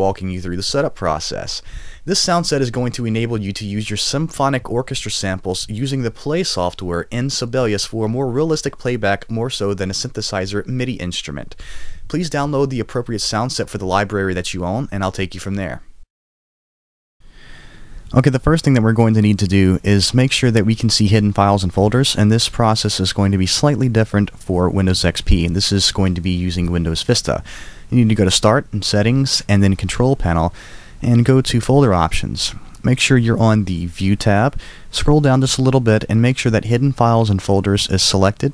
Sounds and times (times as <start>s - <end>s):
Speech: 0.0s - 15.9s, 18.1s - 38.5s.